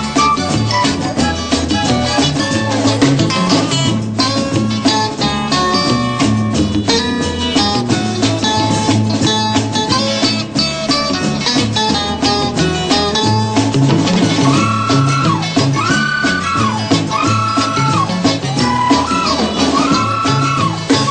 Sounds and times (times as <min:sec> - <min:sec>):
Music: 0:00.0 - 0:21.1.